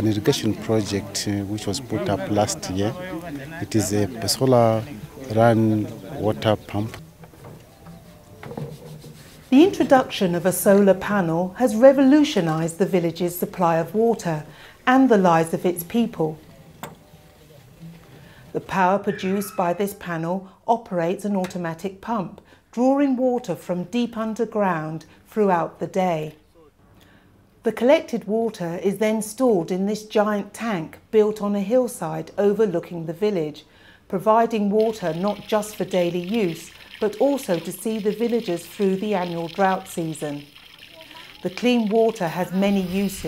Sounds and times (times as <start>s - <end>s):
Speech: 27.7s - 43.2s.